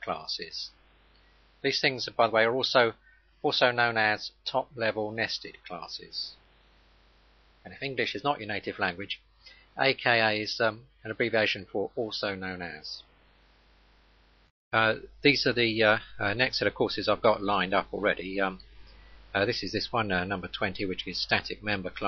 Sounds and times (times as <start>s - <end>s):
Speech: 0.0s - 0.8s, 1.6s - 6.4s, 7.7s - 9.2s, 9.8s - 13.1s, 14.8s - 18.6s, 19.4s - 22.0s.